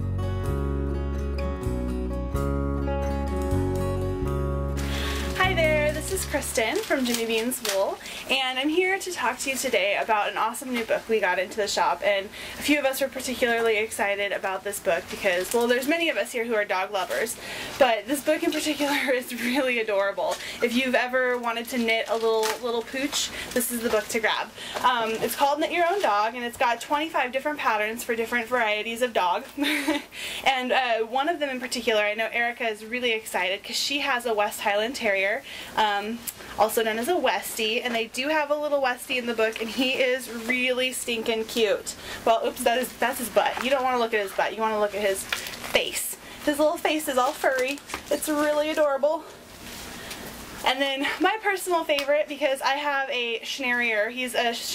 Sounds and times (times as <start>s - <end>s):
Speech: 5.4s - 49.3s, 50.6s - 54.7s.